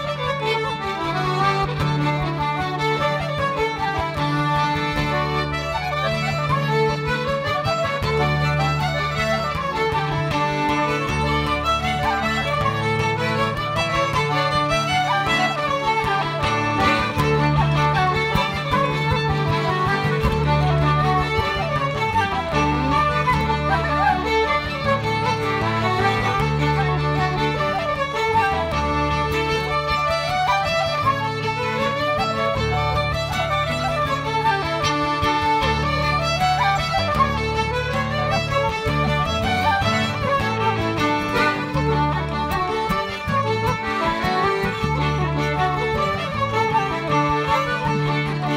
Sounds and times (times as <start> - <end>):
Traditional music: 0.0 - 48.5.